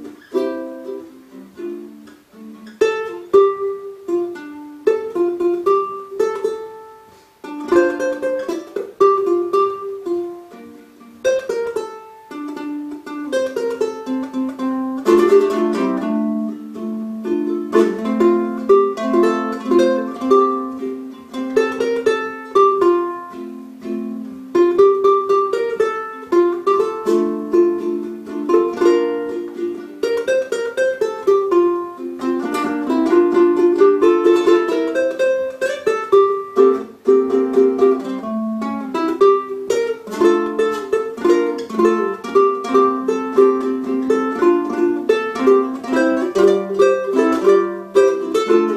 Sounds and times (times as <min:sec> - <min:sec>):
Inside, small room: 0:00.0 - 0:48.7
Ukulele: 0:00.0 - 0:48.7.